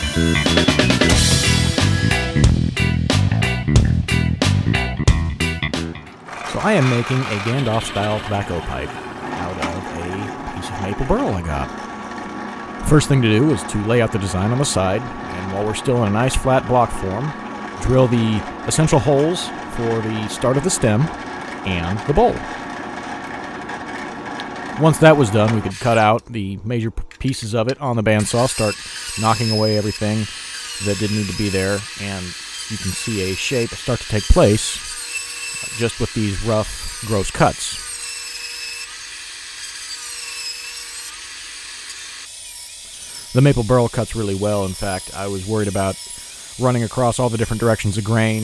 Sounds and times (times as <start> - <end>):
Sawing: 6.1 - 26.2, 28.1 - 48.4.